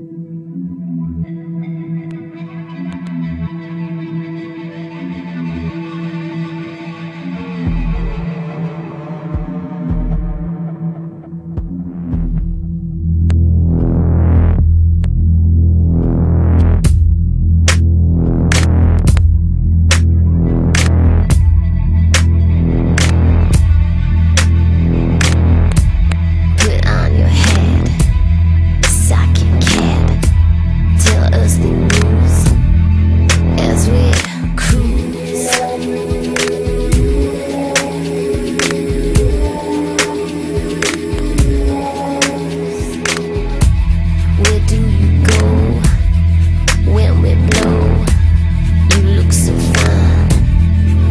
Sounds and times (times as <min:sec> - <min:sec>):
Music: 0:00.0 - 0:51.1.